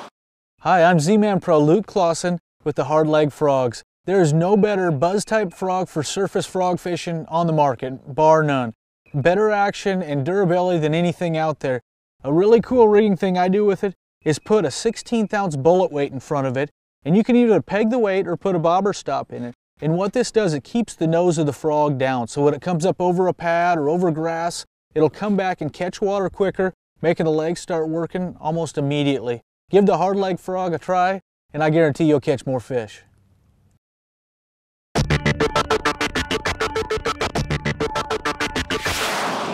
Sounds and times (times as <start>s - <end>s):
Speech: 0.6s - 33.1s.